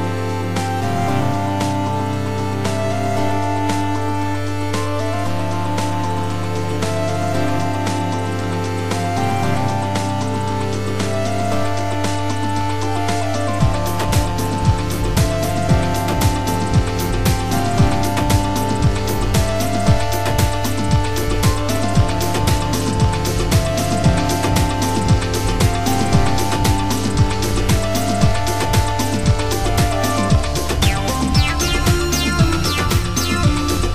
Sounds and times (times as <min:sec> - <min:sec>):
Music: 0:00.0 - 0:33.9.